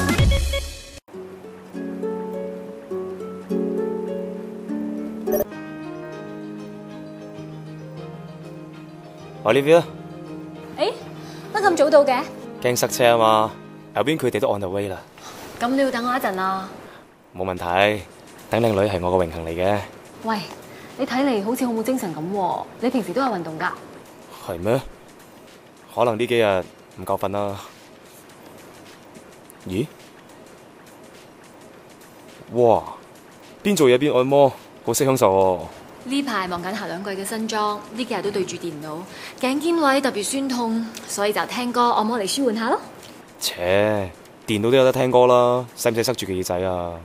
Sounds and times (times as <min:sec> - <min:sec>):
Music: 0:00.0 - 0:16.4, 0:17.5 - 0:47.0.